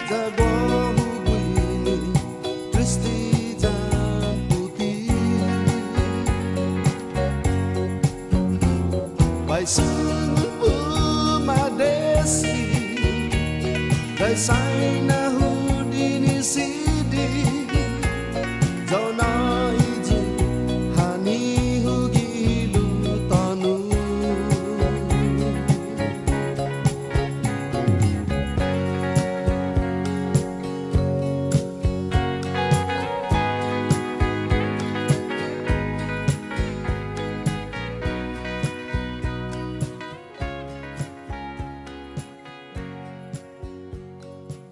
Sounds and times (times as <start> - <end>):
Music: 0.0 - 44.7.